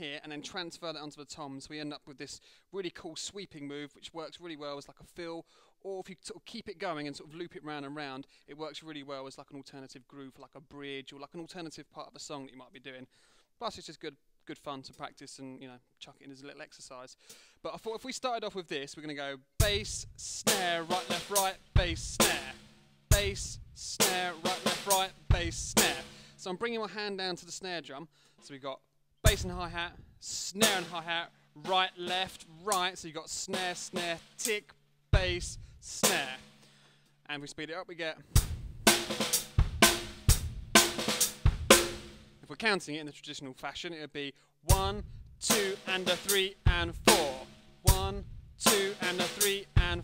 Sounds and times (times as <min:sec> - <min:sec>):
Bass drum: 0:19.6 - 0:26.2, 0:29.3 - 0:31.1, 0:35.2 - 0:36.6, 0:38.3 - 0:42.5, 0:44.7 - 0:50.0
Drum kit: 0:19.6 - 0:26.4, 0:29.3 - 0:36.8, 0:38.2 - 0:42.5, 0:44.7 - 0:50.0
Rimshot: 0:38.4 - 0:42.3.